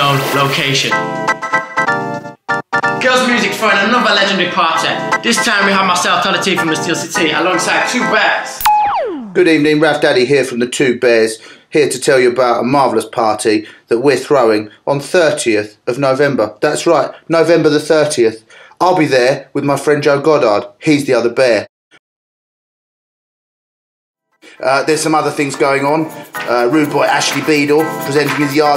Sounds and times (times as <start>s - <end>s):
Speech: 0.0s - 1.0s, 3.0s - 8.6s, 9.4s - 21.7s, 24.6s - 28.7s.